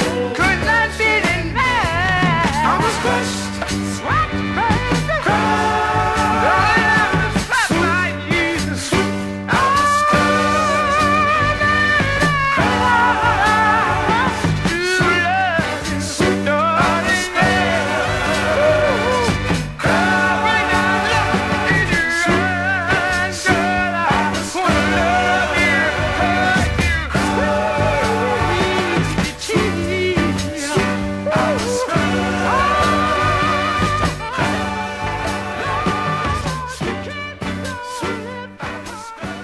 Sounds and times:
Soul music: 0.0s - 39.4s.

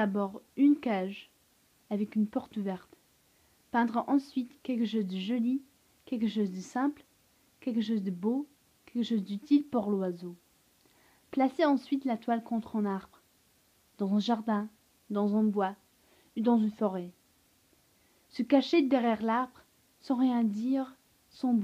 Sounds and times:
Speech: 0.0s - 3.0s, 3.7s - 10.4s, 11.3s - 13.2s, 14.0s - 15.8s, 16.4s - 17.2s, 18.3s - 21.6s.

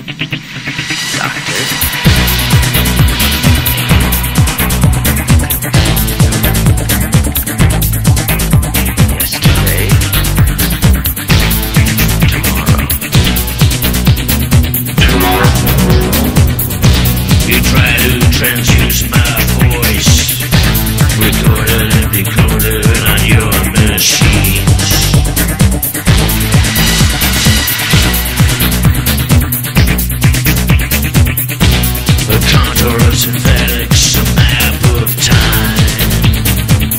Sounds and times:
Music: 0.0s - 36.9s.

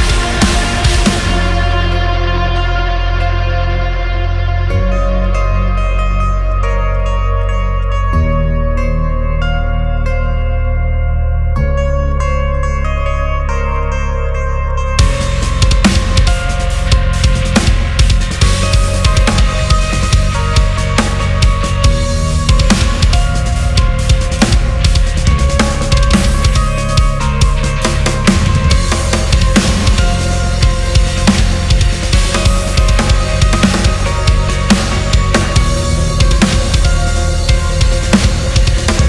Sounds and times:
Heavy metal: 0.0s - 10.3s, 11.6s - 39.0s
Guitar: 0.0s - 39.0s.

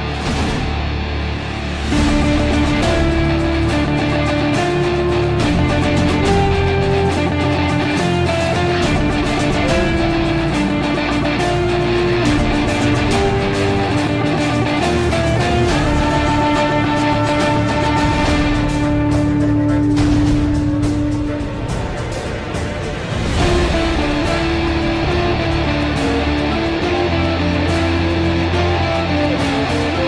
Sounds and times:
Electric guitar: 0.0s - 30.0s
Strum: 0.0s - 30.0s.

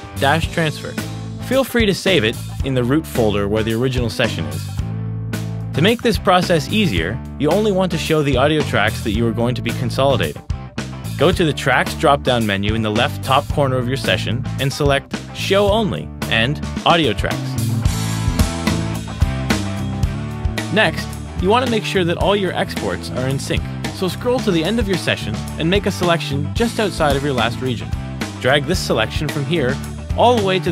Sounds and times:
Music: 0.0s - 30.7s
Speech: 0.2s - 4.8s, 5.8s - 10.4s, 11.2s - 17.6s, 20.7s - 30.7s.

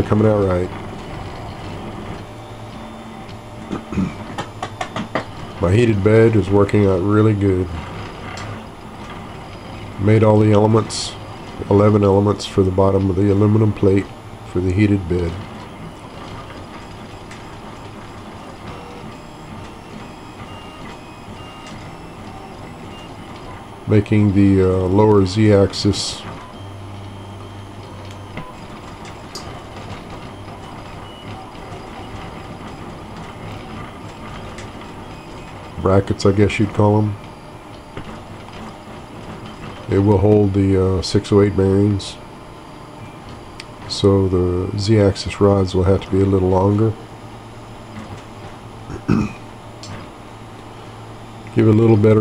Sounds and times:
Speech: 0.0s - 0.8s, 5.6s - 7.9s, 10.0s - 15.4s, 23.9s - 26.4s, 35.8s - 37.2s, 39.9s - 42.2s, 43.9s - 47.0s, 51.5s - 52.2s
Printer: 0.0s - 52.2s.

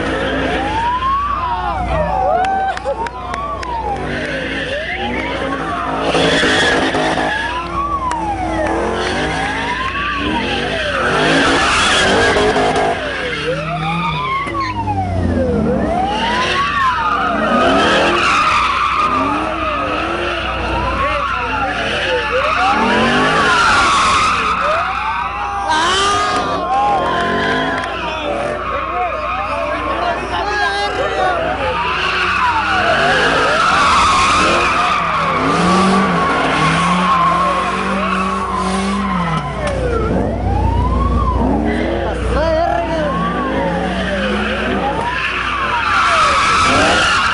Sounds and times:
Police car (siren): 0.0s - 47.3s.

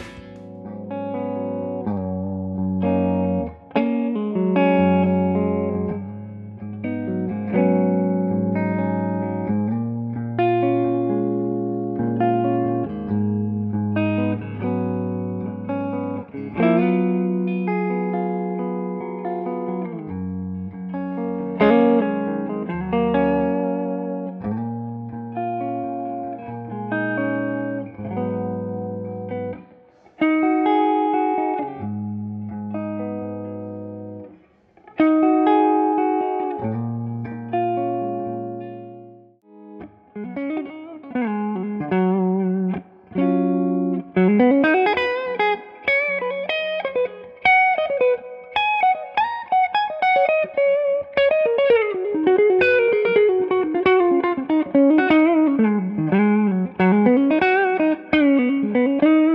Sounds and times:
Music: 0.0s - 59.3s.

